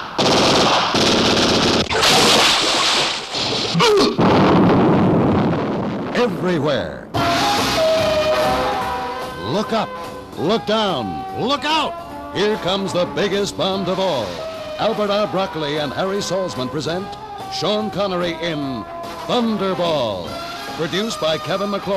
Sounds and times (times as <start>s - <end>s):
Speech: 6.2s - 7.1s, 9.4s - 21.9s
Music: 7.2s - 21.9s.